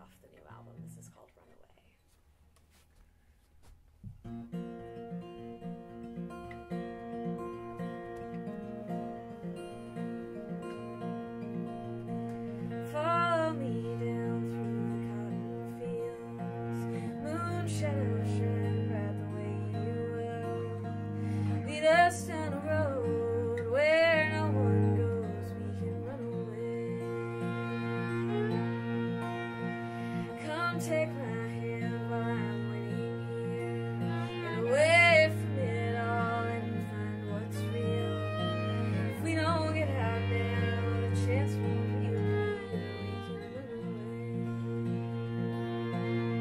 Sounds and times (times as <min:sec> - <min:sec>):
Acoustic guitar: 0:02.6 - 0:46.4.